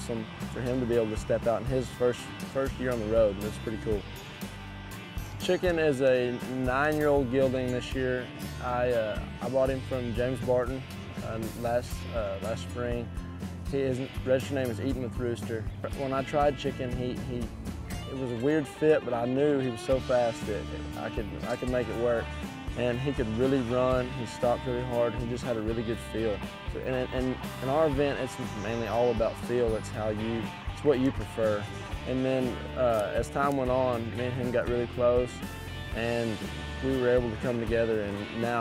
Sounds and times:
Speech: 0.0s - 4.0s, 5.4s - 13.1s, 13.7s - 17.5s, 18.1s - 35.4s, 36.0s - 38.6s
Music: 0.0s - 38.6s.

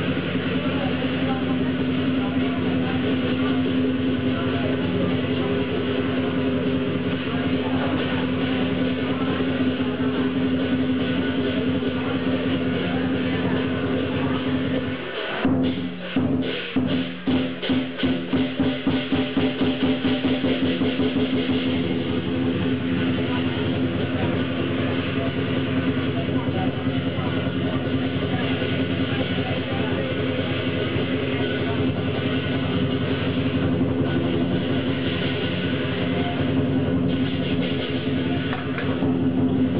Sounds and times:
Speech: 0.0s - 39.7s
Music: 6.6s - 39.7s.

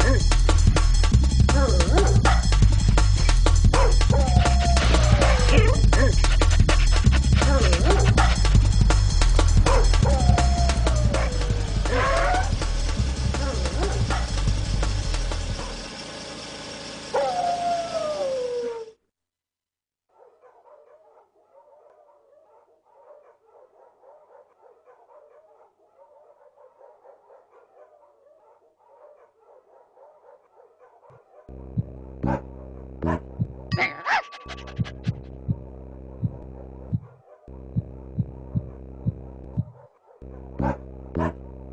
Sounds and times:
Music: 0.0s - 15.8s, 31.6s - 41.7s
Bow-wow: 3.8s - 4.0s, 9.7s - 10.0s, 20.1s - 31.6s, 32.2s - 33.2s, 33.8s - 37.6s, 38.2s - 41.7s
Howl: 3.8s - 5.8s, 9.7s - 12.6s, 17.2s - 19.0s
Whimper (dog): 9.7s - 12.6s, 17.2s - 19.0s
Yip: 20.2s - 31.5s, 33.8s - 34.9s.

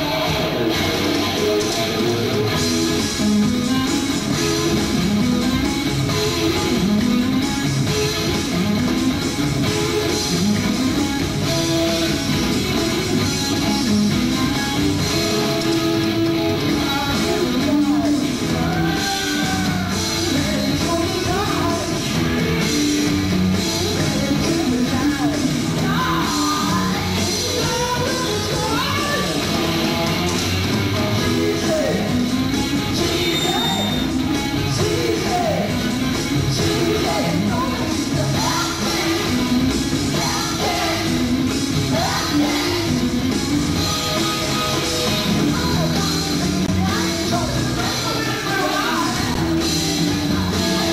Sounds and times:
Music: 0.0s - 50.9s.

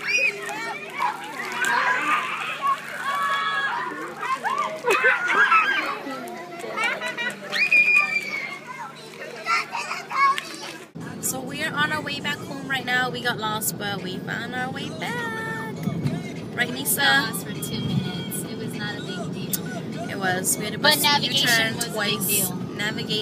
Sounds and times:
Children playing: 0.0s - 23.2s
Outside, urban or manmade: 0.0s - 23.2s
Child speech, kid speaking: 5.6s - 12.9s, 16.7s - 22.6s.

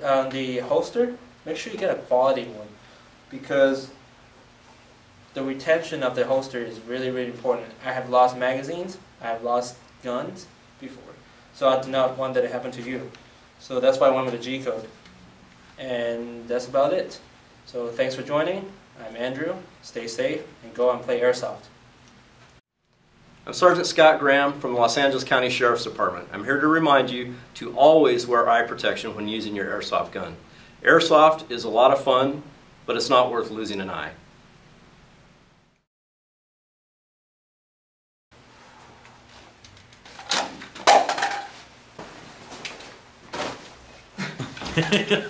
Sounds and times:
Speech: 0.0s - 4.0s, 5.4s - 15.0s, 15.8s - 21.8s, 23.5s - 34.2s.

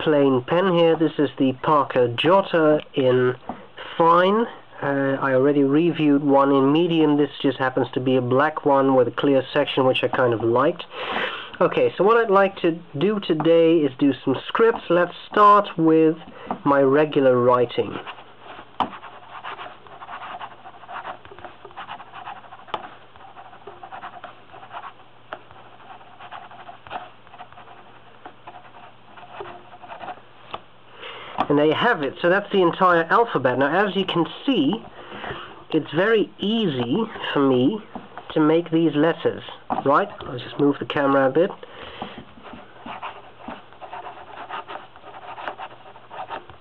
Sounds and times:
Writing: 8.8s - 10.8s, 11.6s - 30.6s, 42.0s - 46.6s.

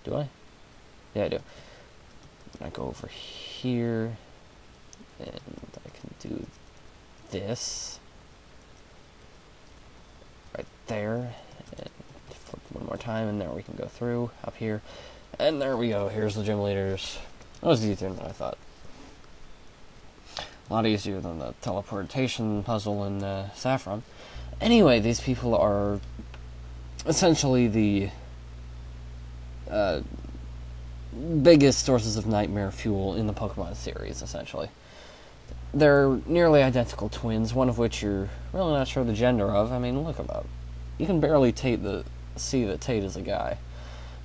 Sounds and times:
Speech: 0.0s - 0.4s, 1.1s - 1.5s, 2.6s - 4.2s, 5.1s - 6.6s, 7.3s - 8.0s, 10.5s - 18.6s, 20.7s - 26.0s, 27.0s - 28.2s, 29.7s - 30.3s, 31.1s - 34.7s, 35.7s - 43.6s.

